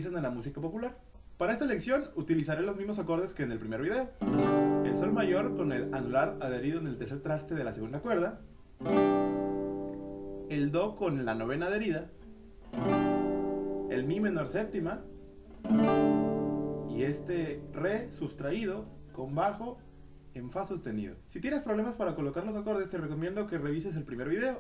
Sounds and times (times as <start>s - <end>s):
Speech: 0.0s - 4.2s, 4.9s - 8.4s, 10.5s - 12.2s, 13.9s - 15.1s, 16.9s - 19.8s, 20.4s - 24.6s
Acoustic guitar: 3.7s - 20.8s.